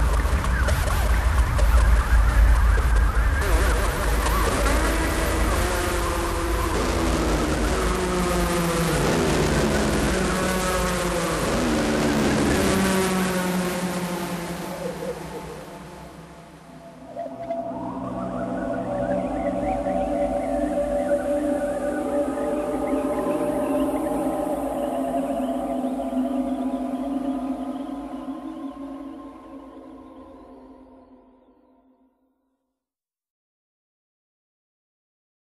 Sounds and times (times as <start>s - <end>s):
Ambient music: 0.0s - 32.0s.